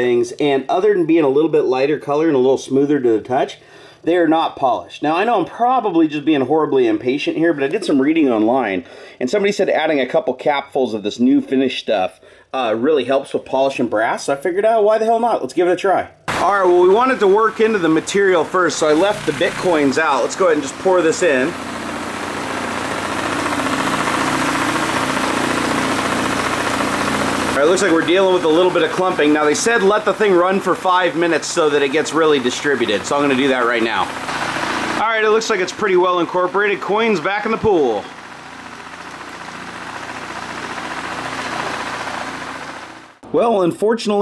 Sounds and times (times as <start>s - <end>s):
Engine: 16.3s - 43.2s.